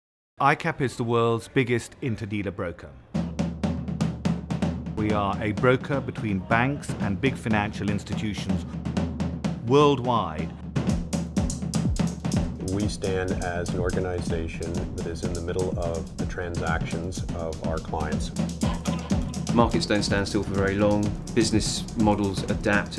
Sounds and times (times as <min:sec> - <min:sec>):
Snare drum: 0:03.2 - 0:22.9.